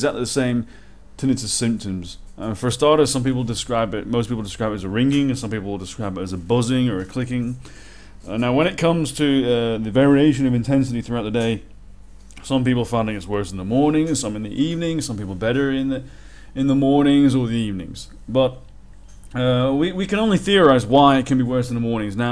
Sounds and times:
Speech: 0.0 - 7.6, 8.2 - 11.7, 12.4 - 18.6, 19.3 - 22.3.

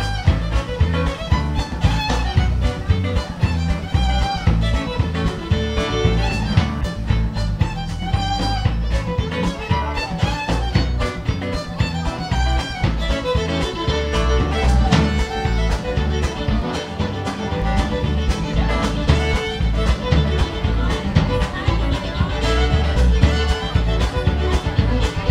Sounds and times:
Pizzicato: 0.0 - 25.3.

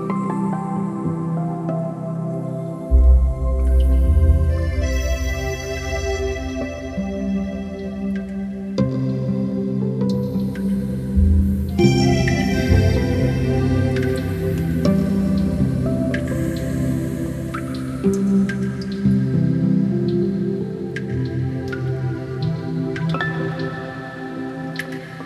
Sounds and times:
Music: 0.0 - 25.2.

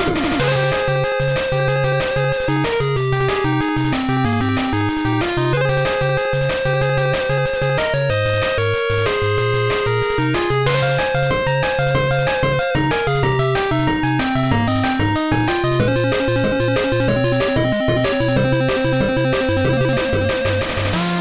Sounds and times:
Video game music: 0.0 - 21.2.

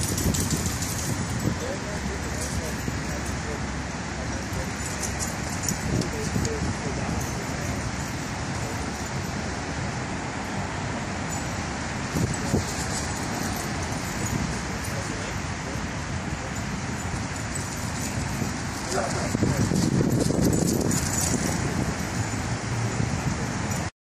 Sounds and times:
Speech: 1.4 - 5.2, 5.8 - 9.6, 14.6 - 16.7, 18.8 - 19.9.

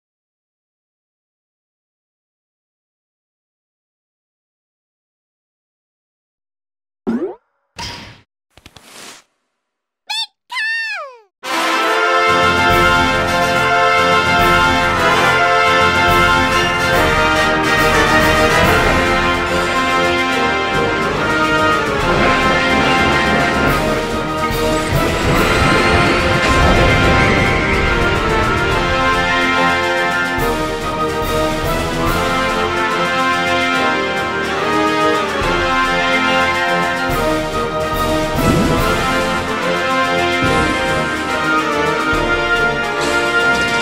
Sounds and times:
Speech: 10.1 - 11.3
Music: 11.4 - 43.8.

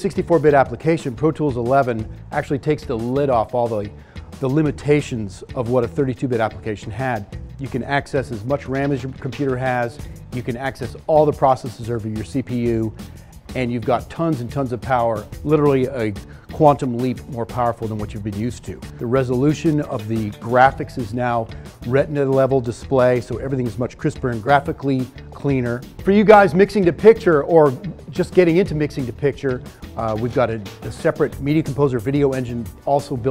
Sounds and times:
Speech: 0.0 - 12.9, 13.5 - 33.3
Music: 0.0 - 33.3.

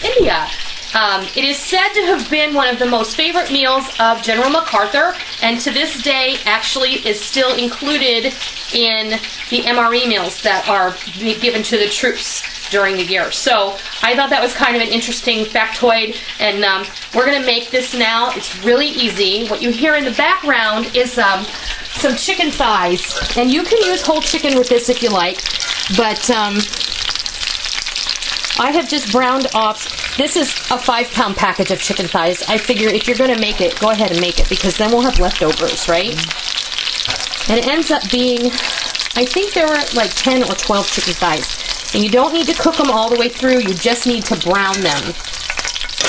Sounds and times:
Sizzle: 0.0 - 46.0.

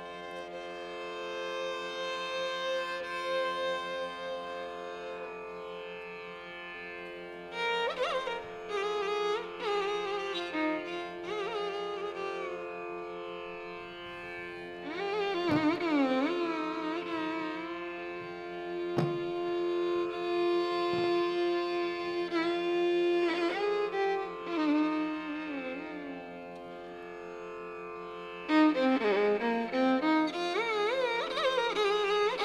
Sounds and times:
Violin, fiddle: 0.0 - 32.4.

